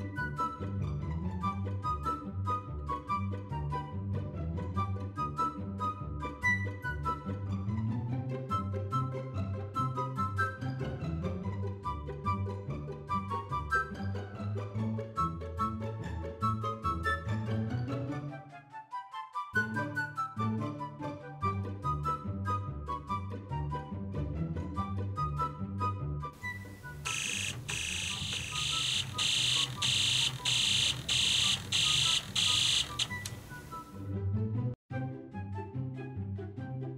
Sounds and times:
Music: 0.0s - 36.9s.

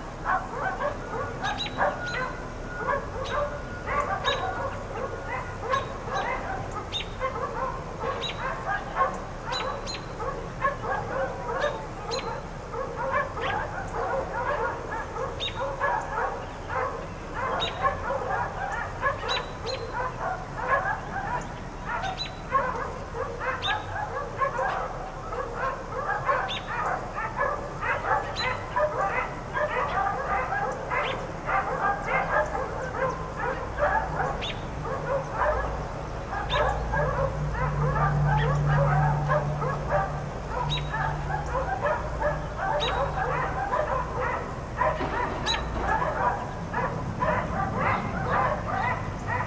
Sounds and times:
Bark: 0.2s - 49.4s.

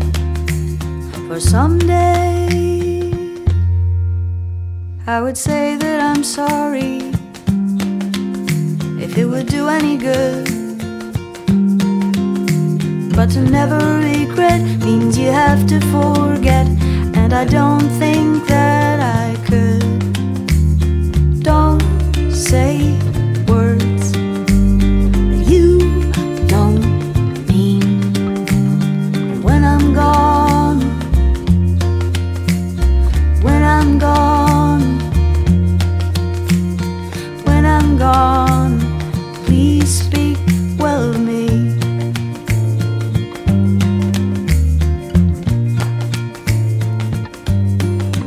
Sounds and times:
Music: 0.0s - 48.2s.

